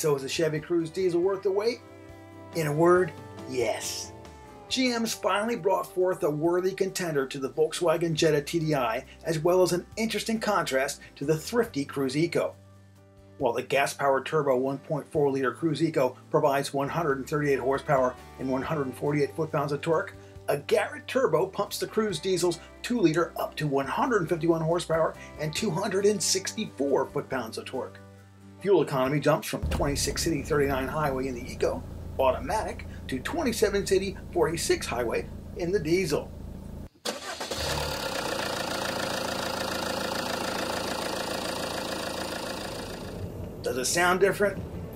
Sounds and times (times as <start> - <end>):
Speech: 0.0 - 1.8, 2.6 - 4.1, 4.7 - 12.6, 13.4 - 28.0, 28.6 - 36.3, 43.6 - 44.6
Music: 0.0 - 36.4, 43.6 - 44.9.